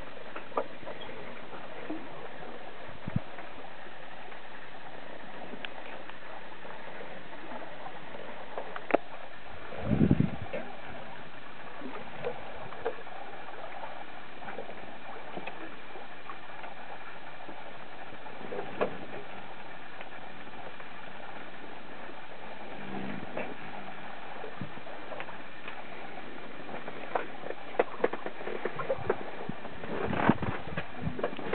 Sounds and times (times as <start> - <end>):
Ocean: 0.0 - 31.5
Outside, rural or natural: 0.0 - 31.5
Sailboat, sailing ship: 0.0 - 31.5.